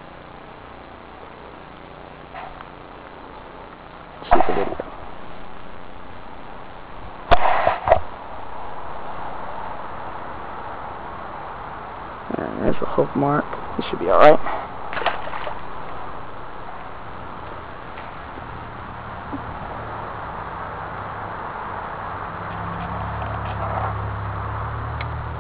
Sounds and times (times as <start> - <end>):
Outside, rural or natural: 0.0 - 25.4
Speech: 12.3 - 14.5.